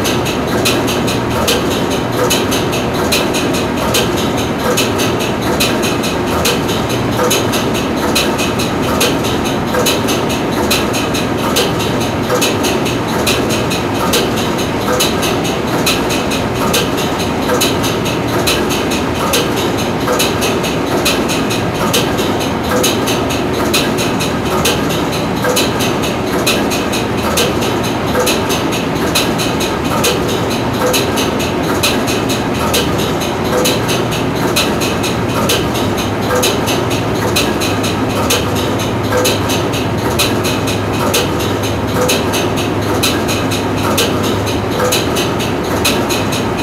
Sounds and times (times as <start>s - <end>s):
Heavy engine (low frequency): 0.0s - 46.6s.